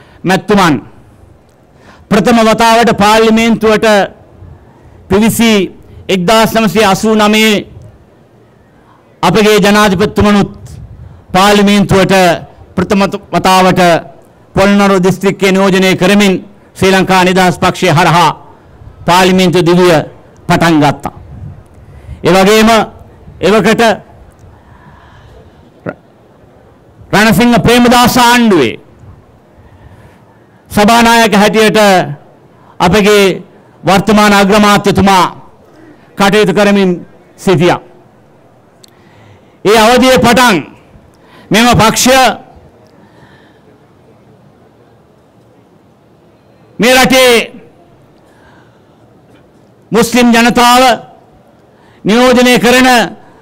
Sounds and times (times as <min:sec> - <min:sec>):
Narration, monologue: 0:00.0 - 0:53.4
Male speech, man speaking: 0:00.2 - 0:00.9, 0:02.1 - 0:04.1, 0:05.1 - 0:07.7, 0:09.2 - 0:10.6, 0:11.4 - 0:18.4, 0:19.1 - 0:21.2, 0:22.2 - 0:24.0, 0:27.2 - 0:28.8, 0:30.7 - 0:32.2, 0:32.8 - 0:35.4, 0:36.2 - 0:37.9, 0:39.7 - 0:40.7, 0:41.5 - 0:42.5, 0:46.8 - 0:47.6, 0:50.0 - 0:51.1, 0:52.1 - 0:53.2.